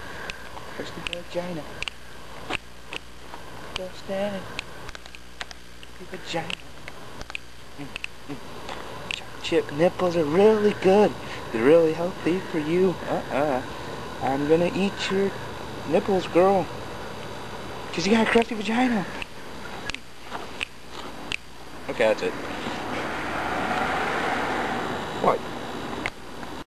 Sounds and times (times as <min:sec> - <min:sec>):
Male speech, man speaking: 0:00.8 - 0:01.7, 0:09.2 - 0:13.6, 0:14.2 - 0:16.7, 0:17.9 - 0:19.2, 0:21.9 - 0:22.4, 0:25.2 - 0:25.4.